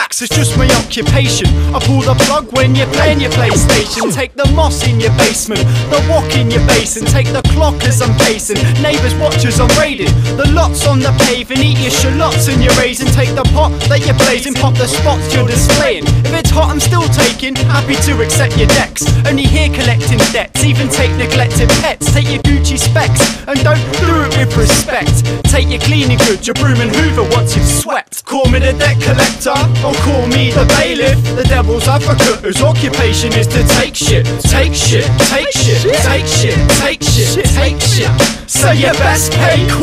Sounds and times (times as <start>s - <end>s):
House music: 0.0s - 39.8s
Rhythm and blues: 0.0s - 39.8s.